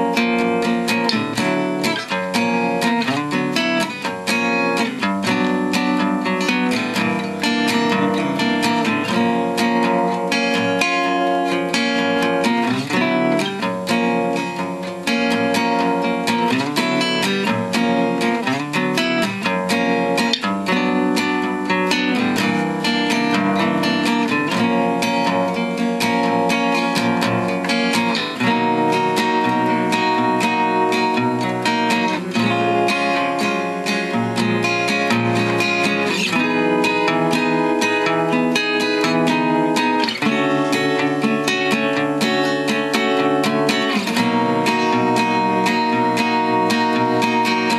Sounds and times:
Acoustic guitar: 0:00.0 - 0:47.7
Strum: 0:00.0 - 0:47.7.

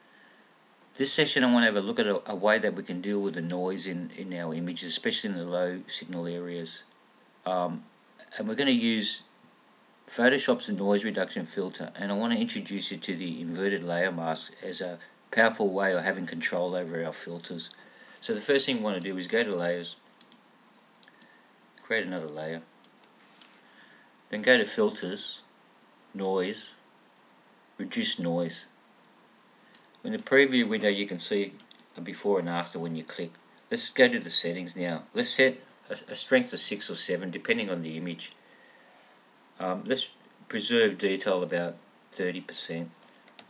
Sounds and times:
Speech: 0:01.0 - 0:09.3, 0:10.1 - 0:20.0, 0:21.8 - 0:22.7, 0:24.3 - 0:25.5, 0:26.1 - 0:26.8, 0:27.8 - 0:28.8, 0:30.0 - 0:38.4, 0:39.6 - 0:43.0.

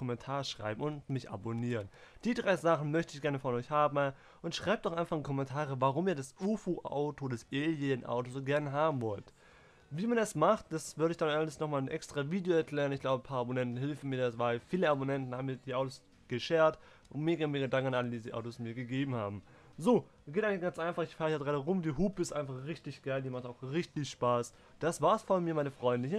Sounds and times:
Speech: 0:00.0 - 0:09.3, 0:09.9 - 0:26.1.

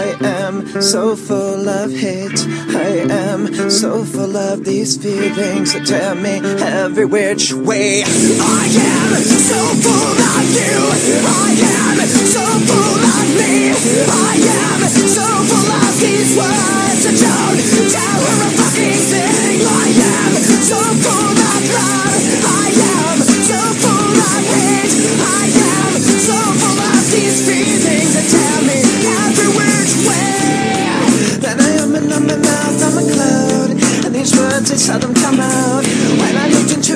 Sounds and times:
Music: 0:00.0 - 0:36.9.

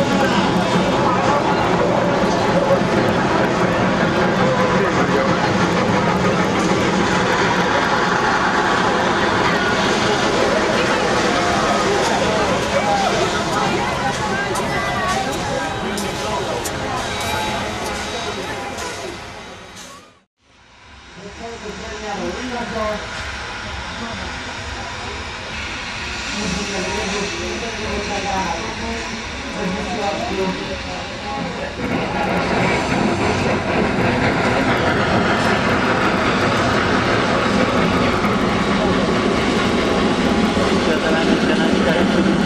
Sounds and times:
Speech: 0:00.0 - 0:20.1, 0:21.2 - 0:42.4.

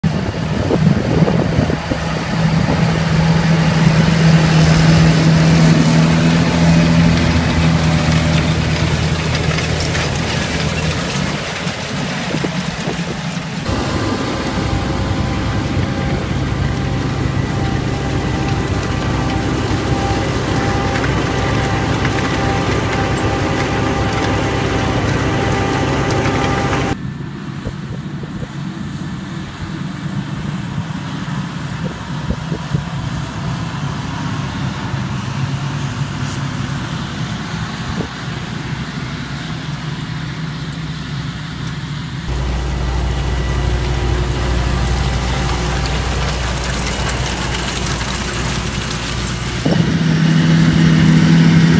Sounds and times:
Vehicle: 0:00.0 - 0:51.7.

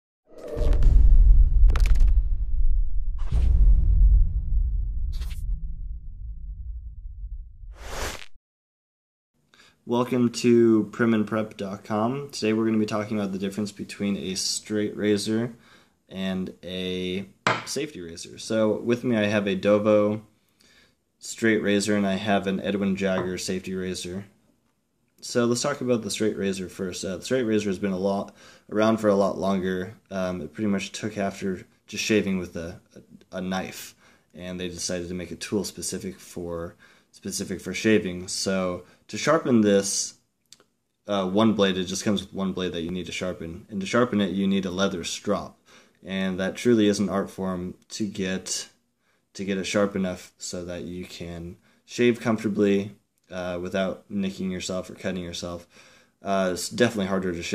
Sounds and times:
Whoosh, swoosh, swish: 0:00.3 - 0:05.9, 0:07.6 - 0:08.4.

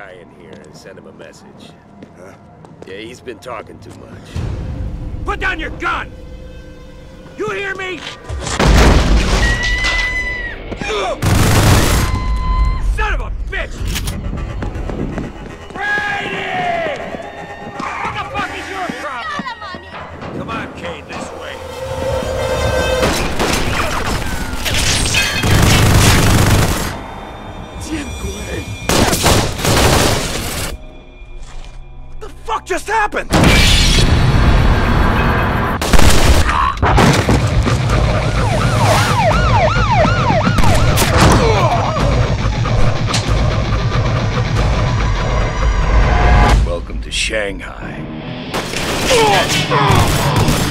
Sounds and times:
Music: 0:00.2 - 0:35.8, 0:37.4 - 0:50.7.

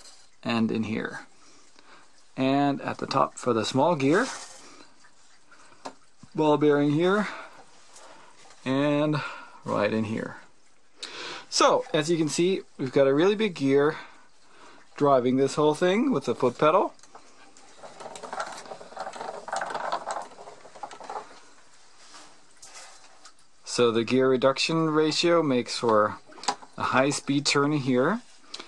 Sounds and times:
Speech: 0:00.4 - 0:01.3, 0:02.4 - 0:04.4, 0:06.3 - 0:07.5, 0:08.6 - 0:10.5, 0:11.5 - 0:14.1, 0:15.0 - 0:17.0, 0:23.6 - 0:26.2, 0:26.8 - 0:28.3.

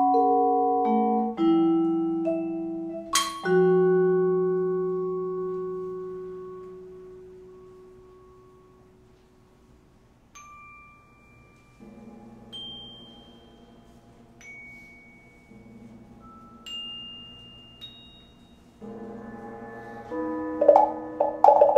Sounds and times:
Glockenspiel: 0:00.0 - 0:09.0, 0:10.3 - 0:21.7.

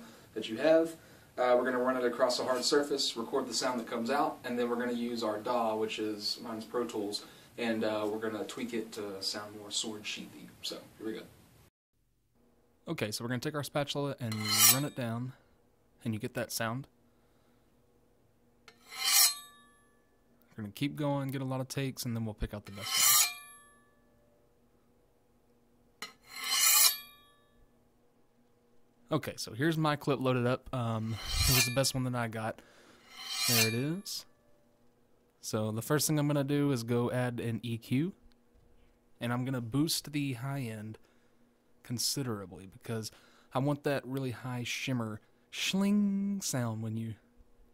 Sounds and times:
Speech: 0:00.4 - 0:11.3, 0:12.8 - 0:15.4, 0:16.0 - 0:16.9, 0:20.5 - 0:22.9, 0:29.1 - 0:32.6, 0:33.5 - 0:34.3, 0:35.4 - 0:38.2, 0:39.2 - 0:41.0, 0:41.8 - 0:47.3.

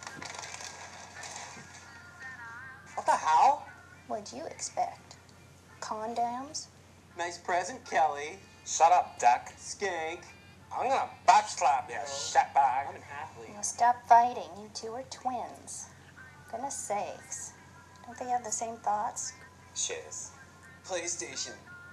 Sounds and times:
Music: 0:00.0 - 0:21.9
Speech: 0:10.8 - 0:17.5.

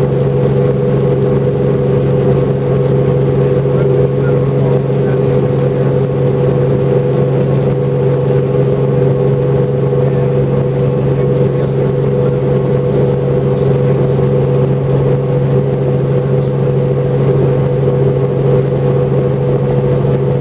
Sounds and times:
Speech: 0:03.5 - 0:06.1, 0:10.0 - 0:14.4, 0:16.1 - 0:17.6.

